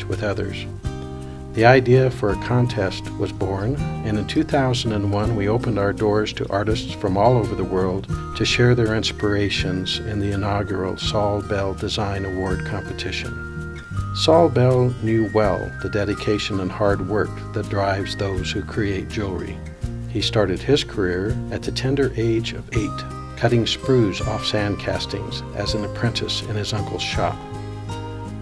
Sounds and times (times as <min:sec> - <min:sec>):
Speech: 0:00.0 - 0:00.7, 0:01.6 - 0:13.4, 0:14.2 - 0:27.5
Music: 0:00.0 - 0:28.4.